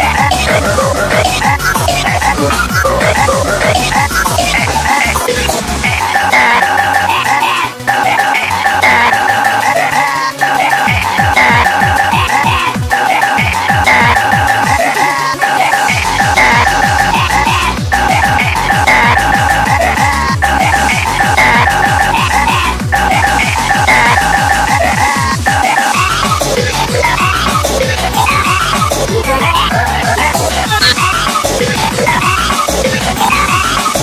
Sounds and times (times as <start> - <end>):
Music: 0.0 - 34.0.